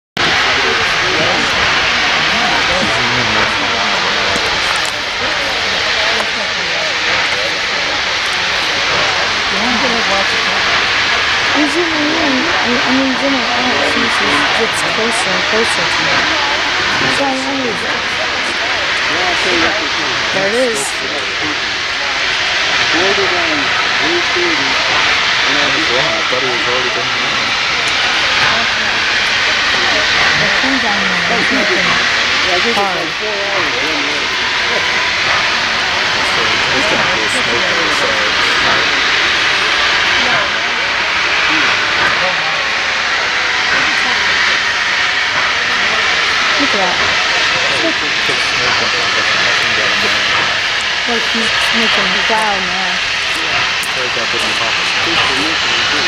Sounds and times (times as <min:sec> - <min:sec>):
Hiss: 0:00.2 - 0:30.6, 0:31.4 - 0:56.0.